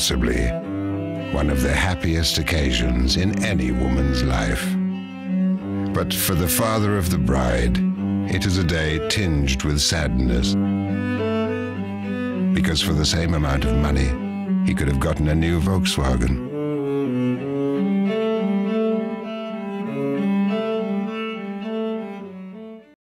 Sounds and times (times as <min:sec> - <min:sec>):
Speech: 0:00.0 - 0:00.6, 0:01.3 - 0:04.8, 0:06.0 - 0:10.6, 0:12.6 - 0:16.4
Music: 0:00.0 - 0:23.0.